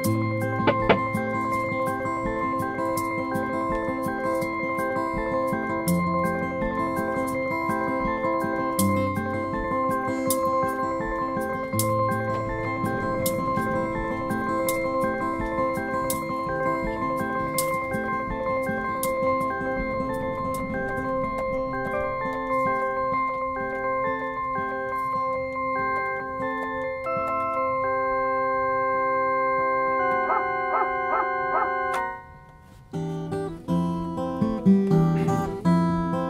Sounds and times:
Music: 0:00.0 - 0:36.3.

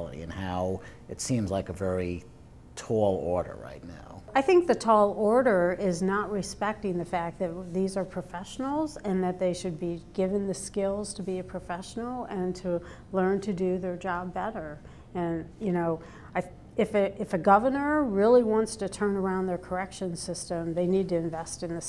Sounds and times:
Speech: 0:02.8 - 0:12.6.

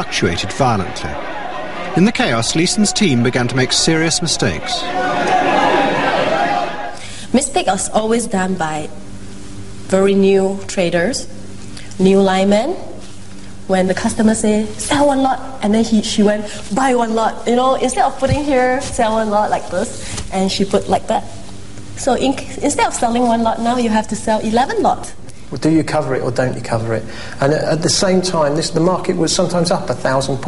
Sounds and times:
Narration, monologue: 0:07.0 - 0:30.4.

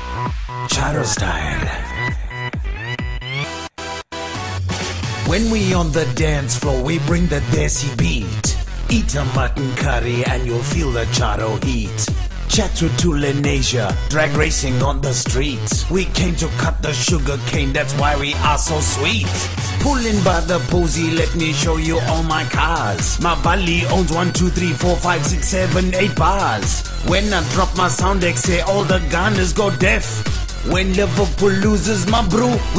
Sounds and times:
Music: 0:00.0 - 0:32.7.

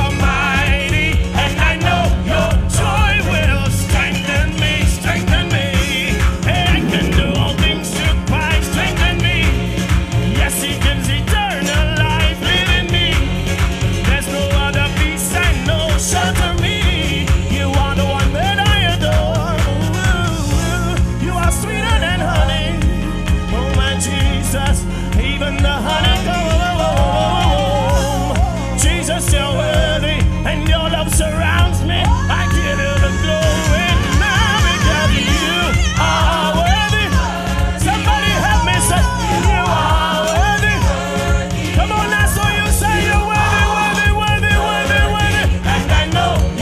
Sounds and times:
Singing: 0:00.0 - 0:46.6
Ska: 0:00.0 - 0:46.6.

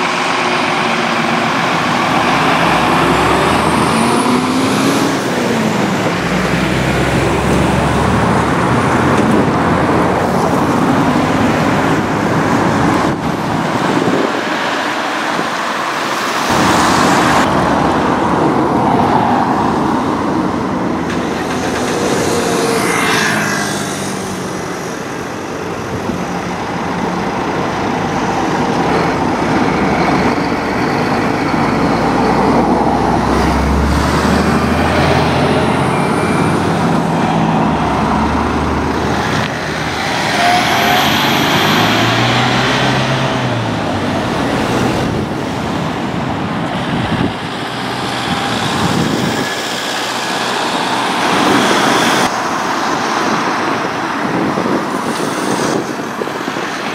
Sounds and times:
Car: 0:00.0 - 0:56.9
Truck: 0:00.0 - 0:56.9.

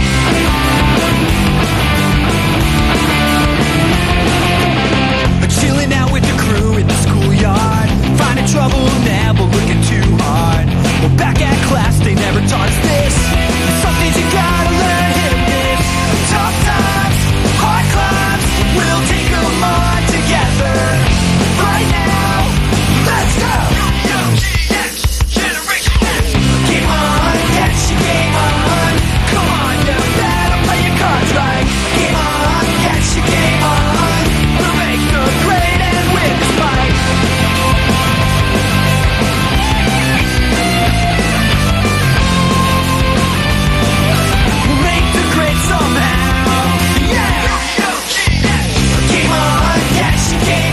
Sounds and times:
Background music: 0:00.0 - 0:50.7.

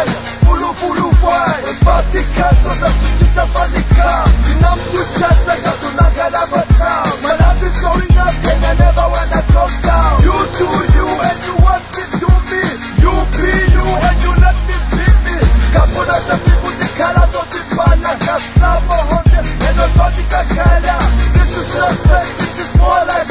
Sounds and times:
Hip hop music: 0:00.0 - 0:23.3
Singing: 0:00.0 - 0:23.3
Song: 0:00.0 - 0:23.3.

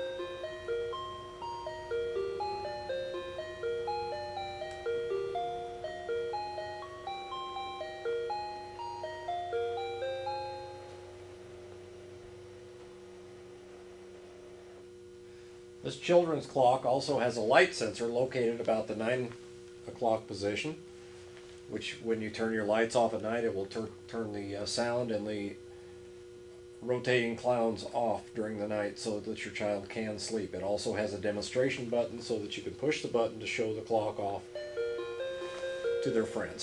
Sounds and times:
Speech: 0:15.8 - 0:20.8, 0:21.7 - 0:25.6, 0:26.8 - 0:34.5, 0:36.0 - 0:36.6.

